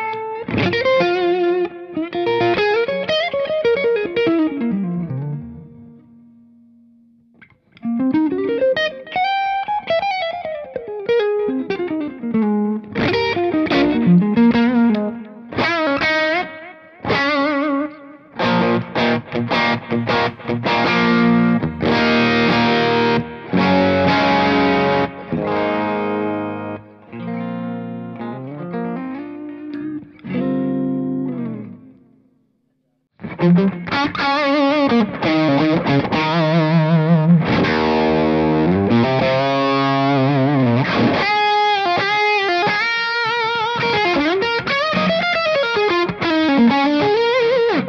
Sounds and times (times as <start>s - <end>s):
Distortion: 0.0s - 47.8s
Music: 0.0s - 47.8s.